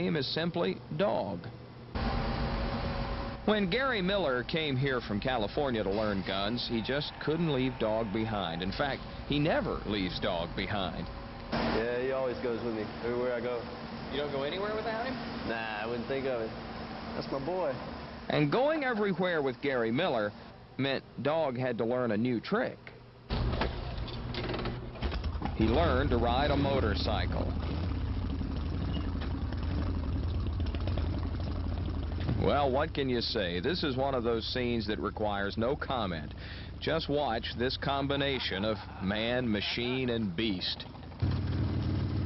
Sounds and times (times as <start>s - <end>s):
Speech: 3.5s - 11.0s, 11.7s - 16.6s, 17.2s - 23.0s, 25.6s - 27.6s, 32.4s - 40.9s.